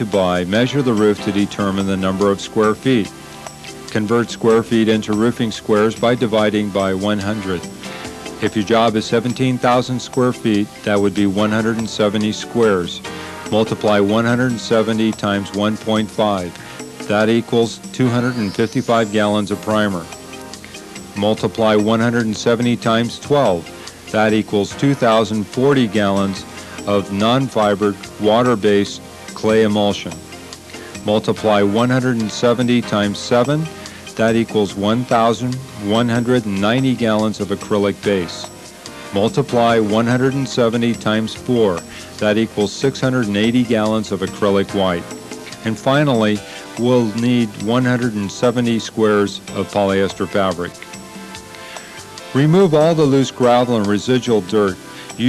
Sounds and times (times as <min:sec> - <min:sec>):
Speech: 0:00.0 - 0:03.1, 0:03.9 - 0:07.7, 0:08.4 - 0:20.1, 0:21.2 - 0:30.2, 0:31.0 - 0:38.5, 0:39.2 - 0:50.8, 0:52.4 - 0:55.2
Music: 0:00.0 - 0:55.2.